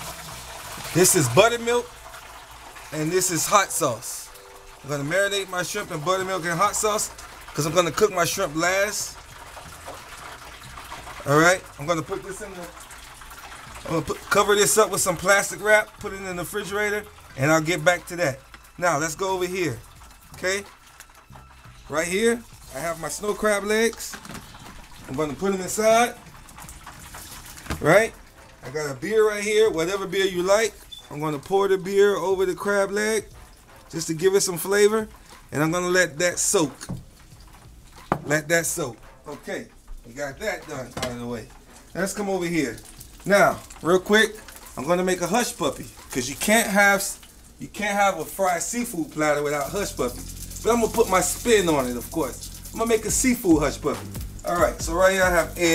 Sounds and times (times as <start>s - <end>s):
Water tap, faucet: 0.0s - 55.7s.